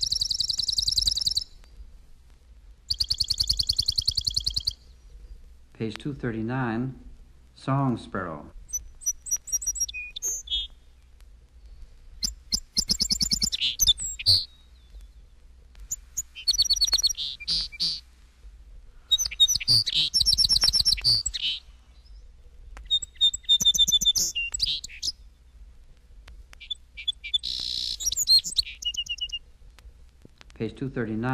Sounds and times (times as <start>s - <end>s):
Chirp, tweet: 0.0s - 1.5s, 2.9s - 5.1s, 8.7s - 10.7s, 12.2s - 15.4s, 16.2s - 18.0s, 19.1s - 25.2s, 26.6s - 29.4s.